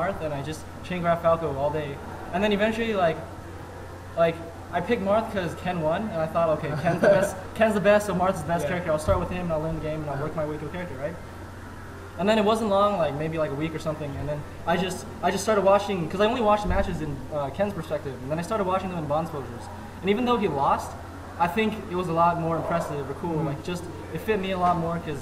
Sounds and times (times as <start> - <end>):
Speech: 0.0 - 3.2, 4.2 - 11.2, 12.2 - 25.2.